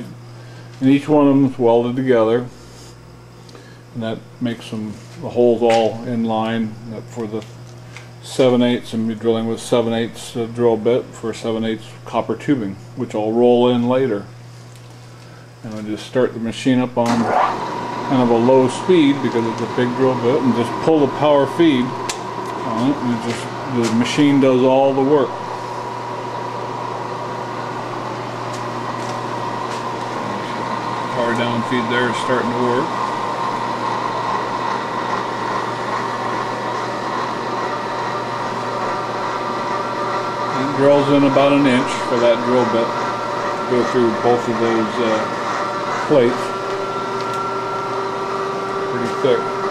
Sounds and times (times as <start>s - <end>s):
Speech: 0.8s - 2.6s, 4.0s - 7.5s, 8.2s - 14.3s, 15.6s - 17.3s, 18.1s - 22.0s, 22.6s - 25.4s, 31.1s - 33.0s, 40.5s - 43.0s, 43.7s - 45.4s, 46.0s - 46.6s, 48.9s - 49.5s.